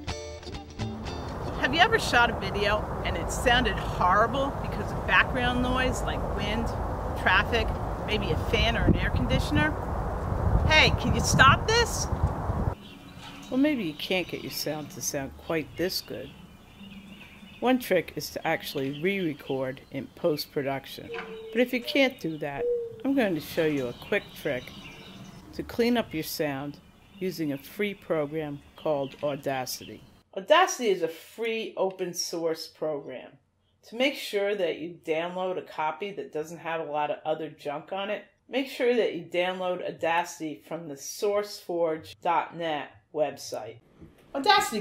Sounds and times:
Speech: 0:01.6 - 0:09.8, 0:10.7 - 0:12.1, 0:13.5 - 0:16.3, 0:17.6 - 0:24.7, 0:25.6 - 0:33.3, 0:33.9 - 0:43.8, 0:44.4 - 0:44.8.

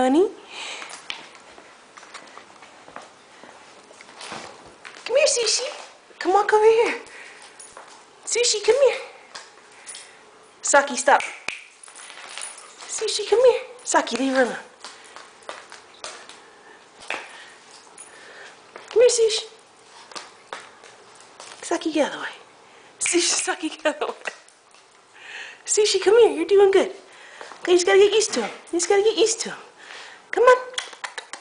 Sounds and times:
Speech: 0:00.0 - 0:00.4, 0:05.1 - 0:07.1, 0:08.3 - 0:09.2, 0:10.6 - 0:11.4, 0:12.9 - 0:14.7, 0:19.0 - 0:19.6, 0:21.6 - 0:22.4, 0:23.0 - 0:24.3, 0:25.7 - 0:27.0, 0:27.6 - 0:29.7, 0:30.3 - 0:30.9.

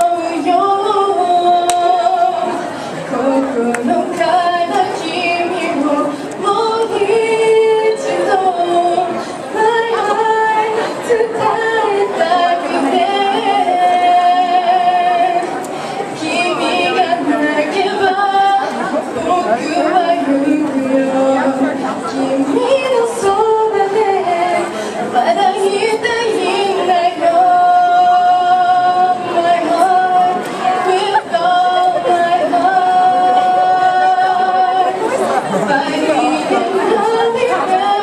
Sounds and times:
Female singing: 0:00.0 - 0:38.0
Speech: 0:00.0 - 0:38.0.

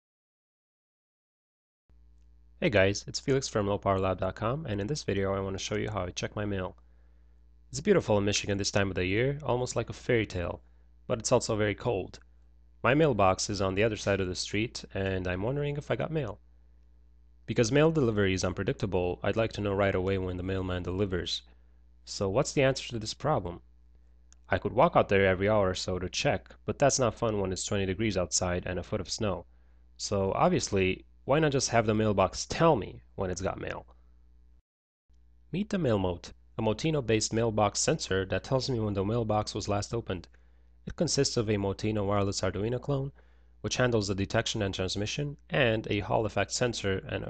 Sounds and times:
Speech: 0:02.6 - 0:06.8, 0:07.7 - 0:16.4, 0:17.5 - 0:23.6, 0:24.4 - 0:34.0, 0:35.5 - 0:40.3, 0:40.9 - 0:47.2.

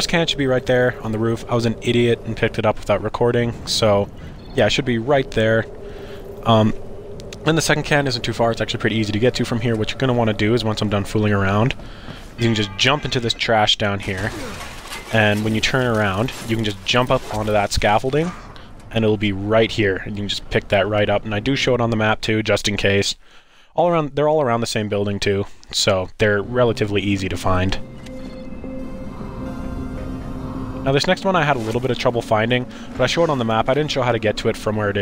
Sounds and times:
Speech: 0:00.0 - 0:05.7, 0:06.4 - 0:06.8, 0:07.4 - 0:11.8, 0:12.4 - 0:23.2, 0:23.8 - 0:27.8, 0:30.8 - 0:35.0.

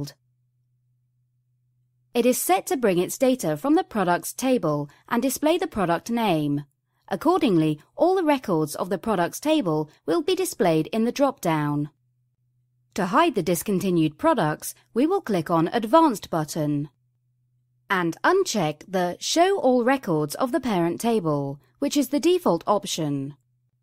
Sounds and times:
Speech: 0:02.2 - 0:12.0, 0:13.0 - 0:16.9, 0:17.9 - 0:23.4.

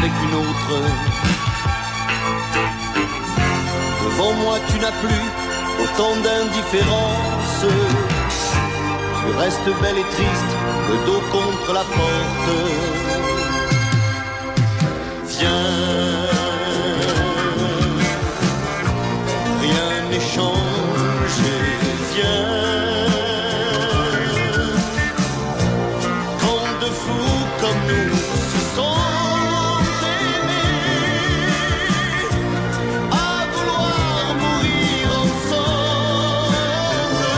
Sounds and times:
Music: 0:00.0 - 0:37.3.

